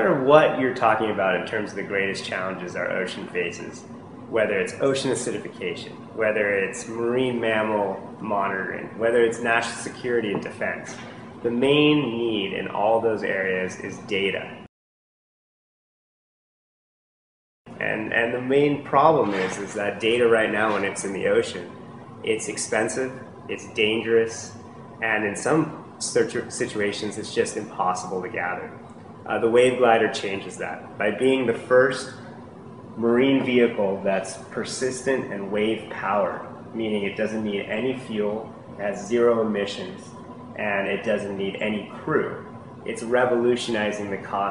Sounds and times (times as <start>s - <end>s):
Speech: 0.0s - 14.7s, 17.7s - 44.5s.